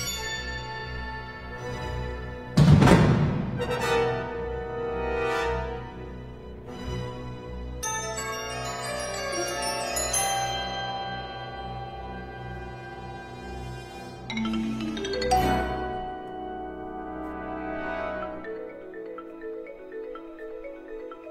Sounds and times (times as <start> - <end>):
Marimba, xylophone: 0.0 - 2.3, 7.8 - 13.4, 14.2 - 21.3
Glockenspiel: 0.0 - 2.4, 7.8 - 21.3.